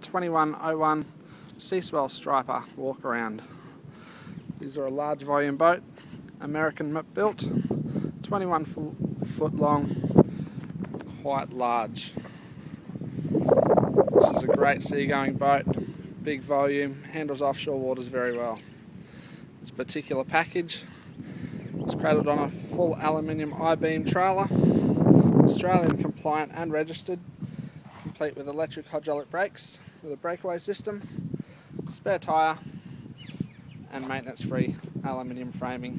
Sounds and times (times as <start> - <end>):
Speech: 0.0 - 3.5, 4.6 - 5.8, 6.4 - 7.5, 8.2 - 9.9, 11.2 - 12.2, 14.2 - 18.7, 19.6 - 20.9, 21.9 - 24.5, 25.5 - 27.2, 28.2 - 31.0, 31.9 - 32.6, 33.9 - 35.9.